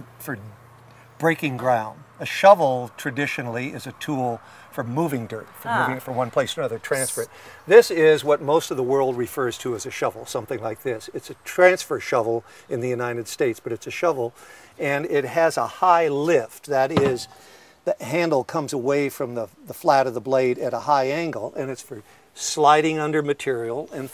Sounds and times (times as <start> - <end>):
Speech: 0.0 - 0.6, 1.2 - 17.3, 17.9 - 24.1.